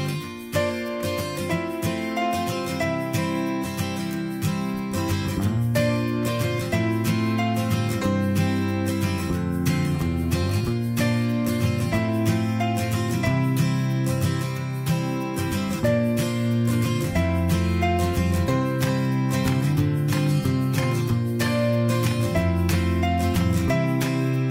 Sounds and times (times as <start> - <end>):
Music: 0.0 - 24.5.